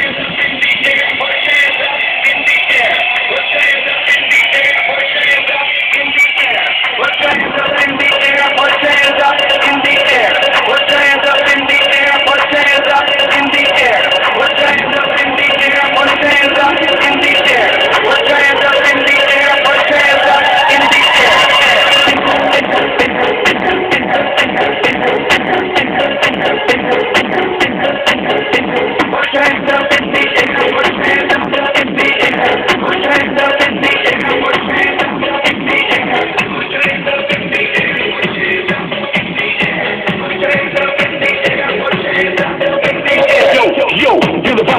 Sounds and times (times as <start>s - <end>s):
Music: 0.0s - 44.7s.